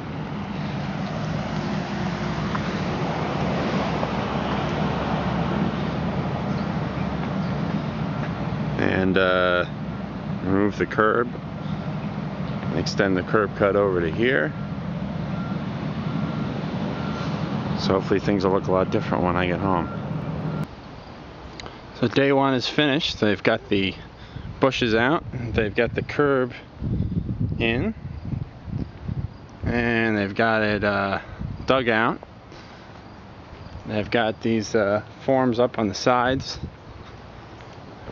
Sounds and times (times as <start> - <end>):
Outside, rural or natural: 0.0 - 38.1
Speech: 8.8 - 9.7, 10.4 - 11.4, 12.7 - 14.6, 17.8 - 19.9, 22.0 - 24.0, 24.6 - 26.7, 27.6 - 28.0, 29.7 - 32.2, 33.9 - 36.7.